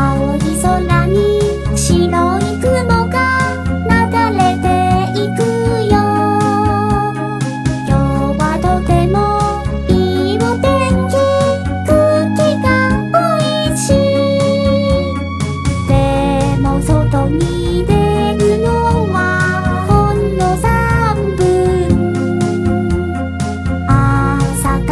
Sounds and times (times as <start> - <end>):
Child singing: 0.0 - 7.2, 7.9 - 15.1, 15.9 - 22.0, 23.9 - 24.9
Music: 0.0 - 24.9.